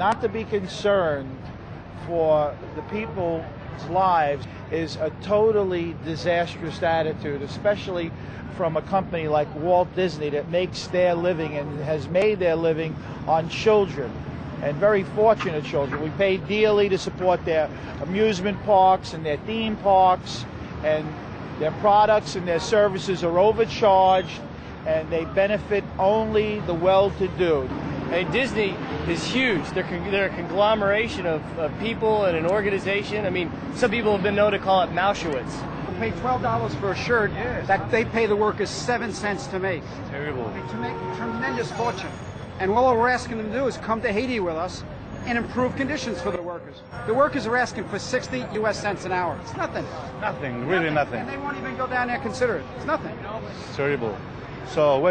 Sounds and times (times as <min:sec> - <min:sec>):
Speech: 0:00.0 - 0:01.4, 0:02.0 - 0:55.1.